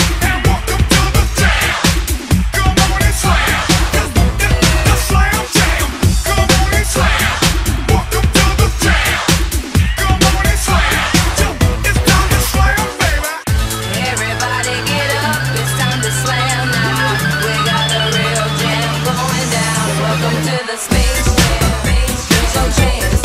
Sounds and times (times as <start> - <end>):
Music: 0.0 - 23.2.